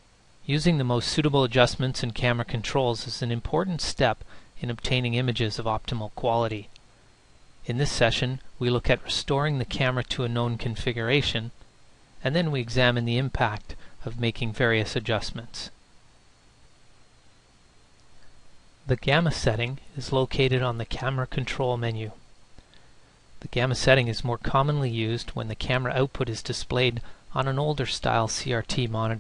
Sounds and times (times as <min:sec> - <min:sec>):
Speech: 0:00.4 - 0:06.8, 0:07.6 - 0:11.6, 0:12.2 - 0:15.8, 0:18.9 - 0:22.2, 0:23.4 - 0:29.2.